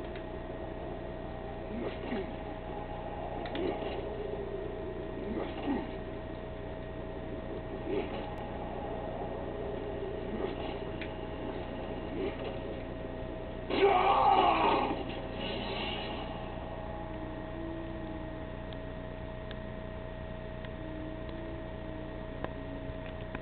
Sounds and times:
Music: 13.6s - 19.6s, 20.6s - 23.4s.

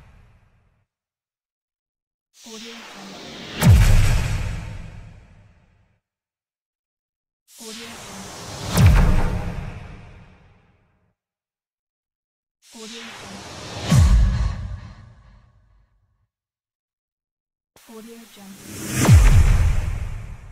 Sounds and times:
Whoosh, swoosh, swish: 12.6s - 15.6s, 18.5s - 20.5s.

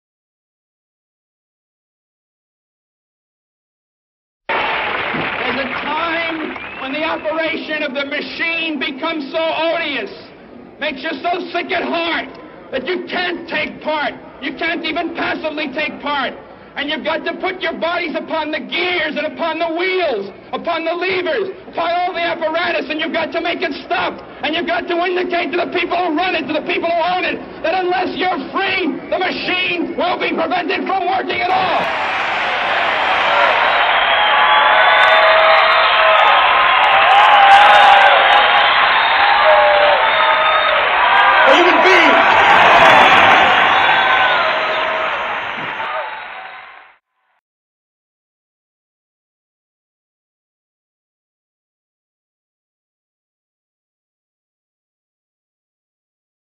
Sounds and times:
Narration, monologue: 5.4s - 31.7s
Male speech, man speaking: 5.4s - 31.8s, 41.4s - 42.2s.

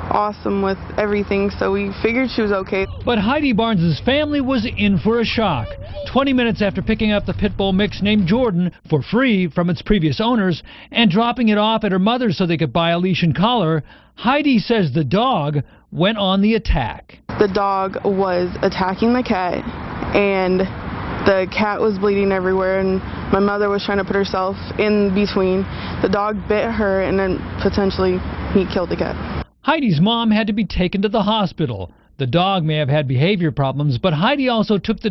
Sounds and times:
Speech: 0.1s - 20.7s, 21.3s - 35.1s.

